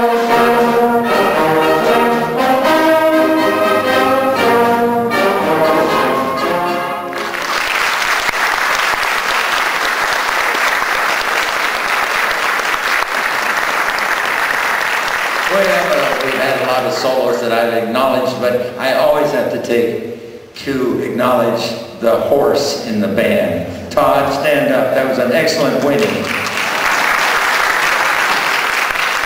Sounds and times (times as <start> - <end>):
Speech: 15.5 - 26.3.